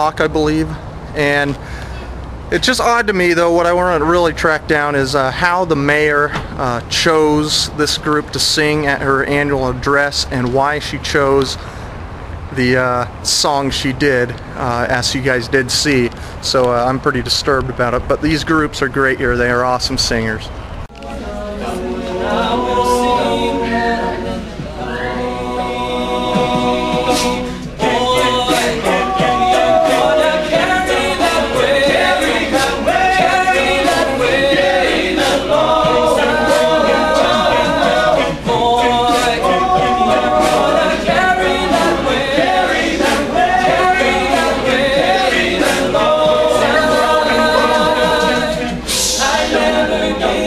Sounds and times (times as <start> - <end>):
Male speech, man speaking: 0.0 - 1.6, 2.5 - 11.6, 12.5 - 20.6
Narration, monologue: 0.0 - 20.8.